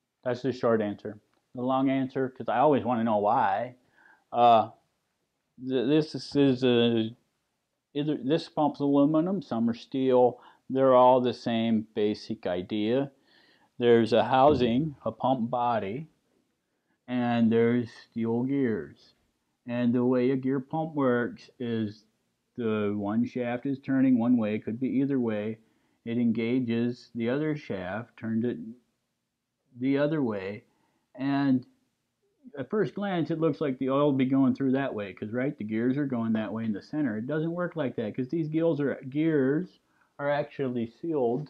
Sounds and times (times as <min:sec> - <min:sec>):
Speech: 0:00.3 - 0:03.8, 0:04.4 - 0:04.7, 0:05.6 - 0:07.2, 0:08.0 - 0:13.1, 0:13.8 - 0:16.1, 0:17.1 - 0:19.1, 0:19.7 - 0:22.0, 0:22.6 - 0:28.8, 0:29.8 - 0:31.7, 0:32.5 - 0:41.4.